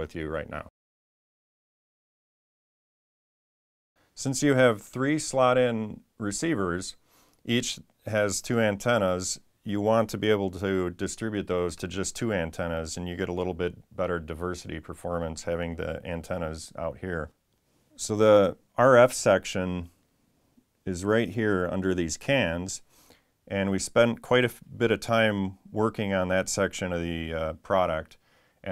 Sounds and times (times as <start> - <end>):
Speech: 0.0 - 0.8, 4.2 - 17.4, 18.0 - 20.0, 20.8 - 22.9, 23.5 - 28.7.